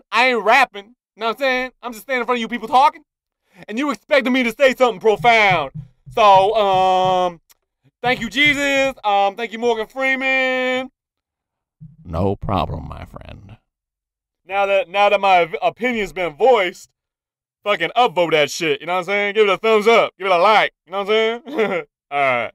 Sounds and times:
Speech: 0.0 - 3.0, 3.6 - 7.4, 8.0 - 10.9, 12.1 - 13.6, 14.5 - 16.9, 17.7 - 21.4, 22.1 - 22.5.

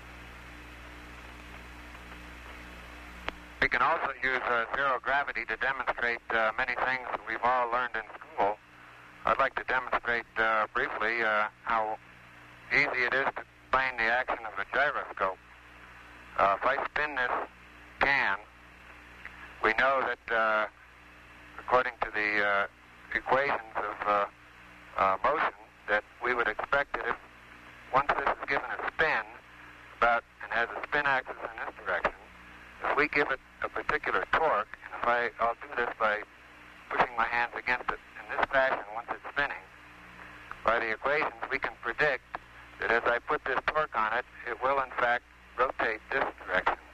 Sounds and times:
Speech: 3.6 - 8.6, 9.2 - 12.0, 12.7 - 15.4, 16.4 - 18.5, 19.6 - 20.8, 21.6 - 24.4, 25.0 - 27.2, 27.9 - 29.4, 30.0 - 36.3, 36.9 - 39.7, 40.6 - 46.9.

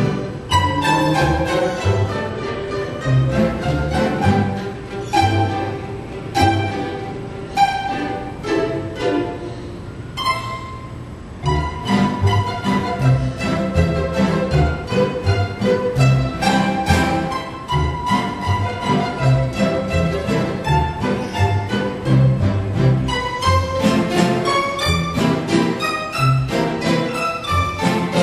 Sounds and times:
Violin, fiddle: 0.0 - 28.2.

